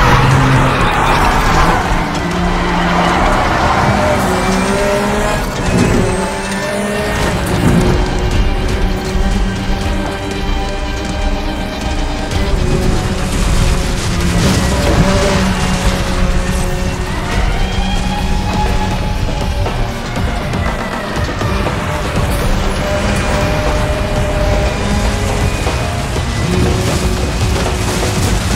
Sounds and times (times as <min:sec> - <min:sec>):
Music: 0:00.0 - 0:28.5.